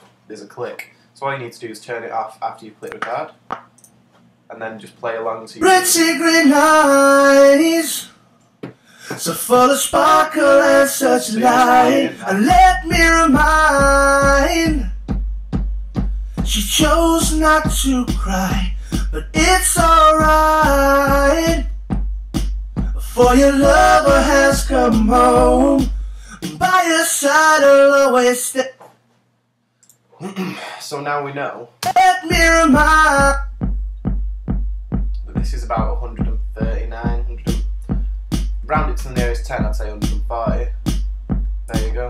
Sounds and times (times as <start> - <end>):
Speech: 0.3 - 3.4, 4.5 - 5.7, 30.2 - 31.8, 35.2 - 37.6, 38.7 - 40.7, 41.7 - 42.1
Music: 9.6 - 26.9, 31.8 - 42.1.